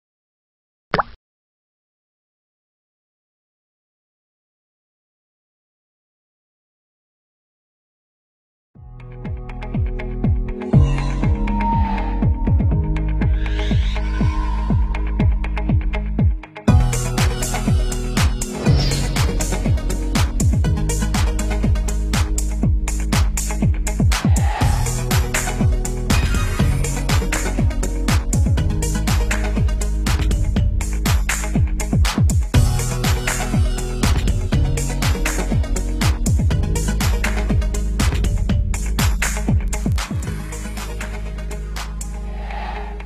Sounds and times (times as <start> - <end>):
Plop: 0.9 - 1.2
Music: 8.8 - 43.0.